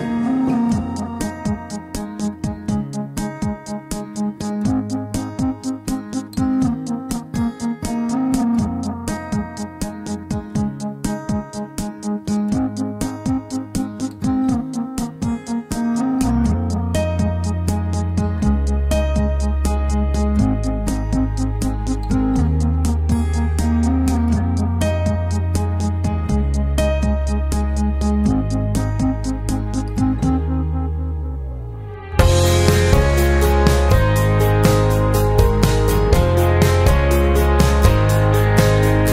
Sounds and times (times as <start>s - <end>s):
Music: 0.0s - 39.1s.